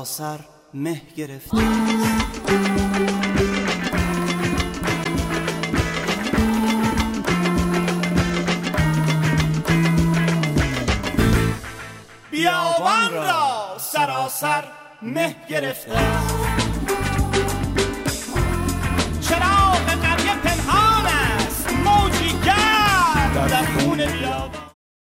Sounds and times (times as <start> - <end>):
Exciting music: 1.5 - 13.5, 16.0 - 24.8.